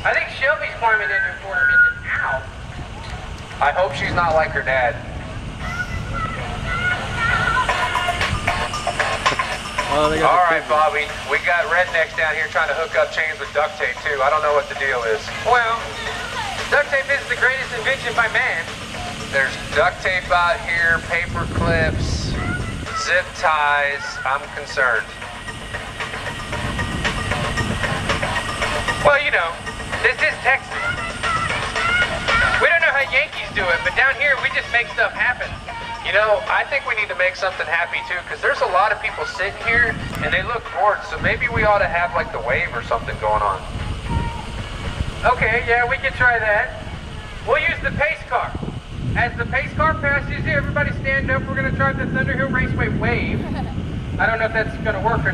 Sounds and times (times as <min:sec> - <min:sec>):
Speech: 0:00.0 - 0:02.5, 0:03.6 - 0:05.0, 0:09.9 - 0:18.7, 0:19.4 - 0:25.1, 0:29.0 - 0:30.8, 0:32.6 - 0:43.7, 0:45.2 - 0:48.6, 0:49.2 - 0:55.3
Music: 0:00.0 - 0:55.3.